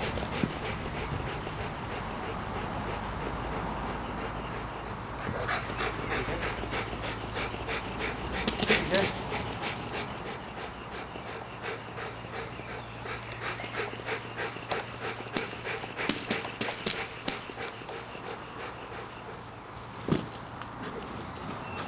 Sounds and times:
Dog: 0.0s - 19.5s.

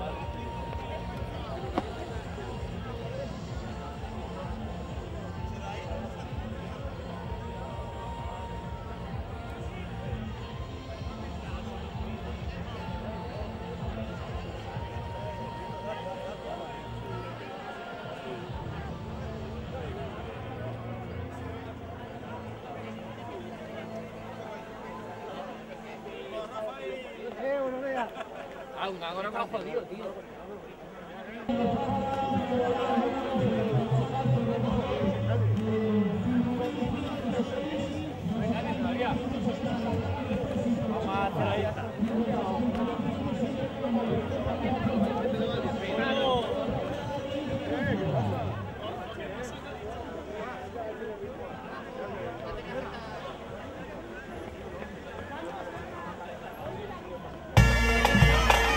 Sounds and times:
Run: 0.0s - 57.5s
Outside, urban or manmade: 0.0s - 58.7s
Speech: 0.0s - 58.7s.

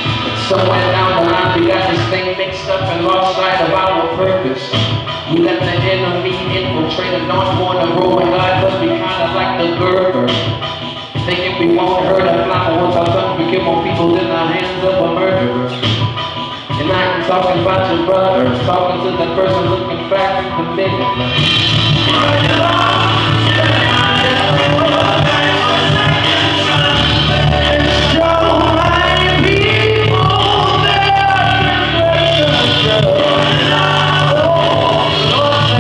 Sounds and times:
Male singing: 0.0s - 10.5s, 11.2s - 15.8s, 16.8s - 21.3s, 22.0s - 35.8s
Rapping: 0.0s - 10.6s, 11.2s - 16.0s, 16.6s - 21.4s, 22.0s - 35.8s
Music: 0.0s - 35.8s.

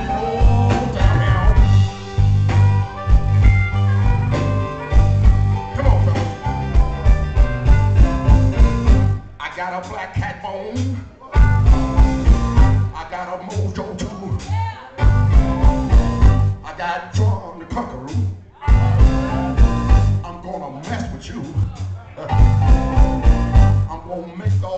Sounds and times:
Music: 0.0s - 24.7s
Speech: 13.0s - 15.0s, 20.4s - 22.4s, 23.9s - 24.7s.

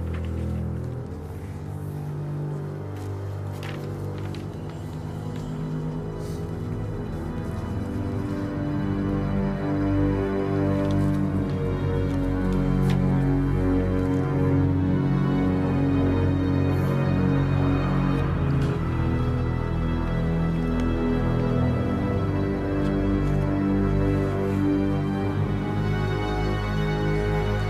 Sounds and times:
Music: 0.0s - 27.6s.

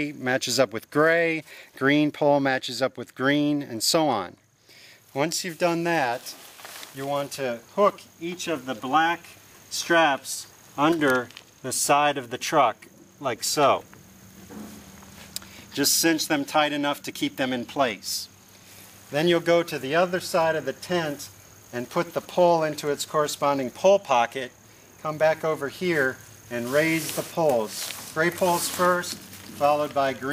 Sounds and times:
Speech: 0.0s - 4.4s, 5.1s - 6.4s, 7.0s - 13.9s, 15.8s - 18.3s, 19.1s - 30.3s.

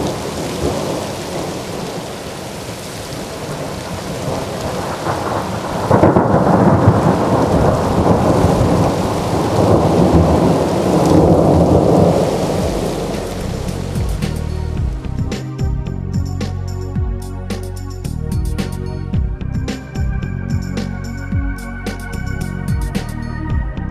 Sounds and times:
Rain: 0.0s - 15.3s
Thunder: 3.2s - 14.9s.

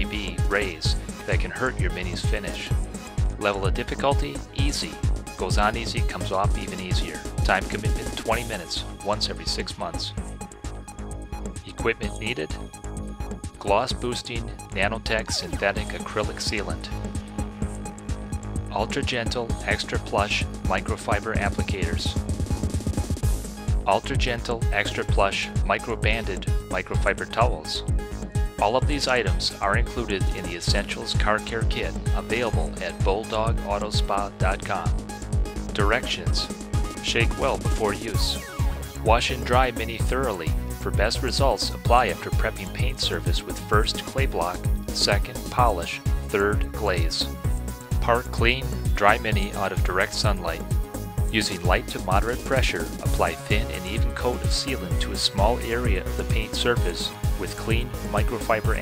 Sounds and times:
Speech: 0.0s - 2.8s, 3.4s - 10.2s, 11.6s - 12.6s, 13.6s - 17.0s, 18.7s - 22.2s, 23.9s - 27.8s, 28.6s - 35.0s, 35.7s - 38.4s, 39.0s - 47.4s, 48.0s - 50.6s, 51.3s - 58.8s
Music: 0.0s - 58.8s.

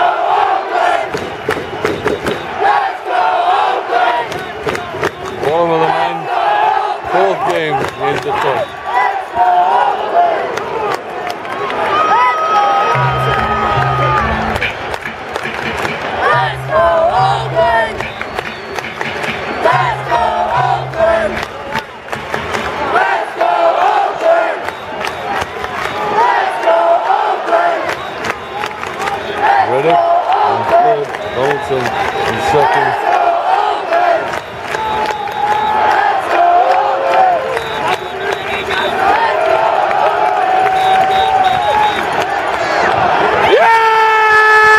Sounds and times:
Speech: 29.7s - 33.0s.

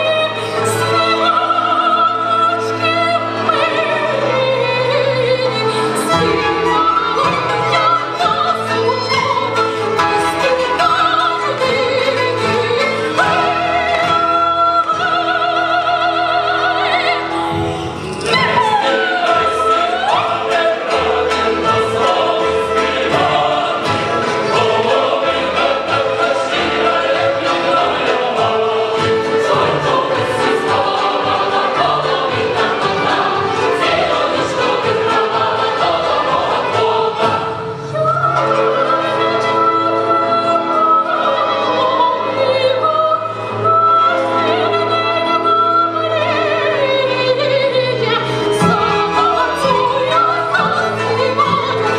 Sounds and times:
Opera: 0.0s - 51.9s.

